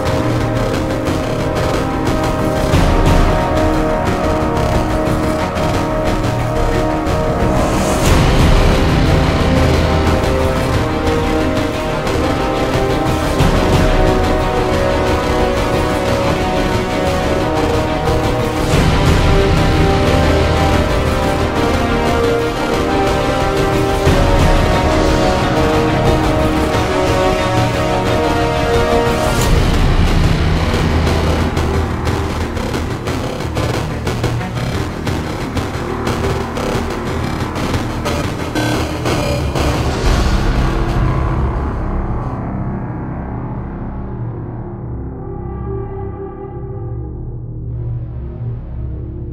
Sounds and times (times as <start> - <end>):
Video game music: 0.0 - 49.3.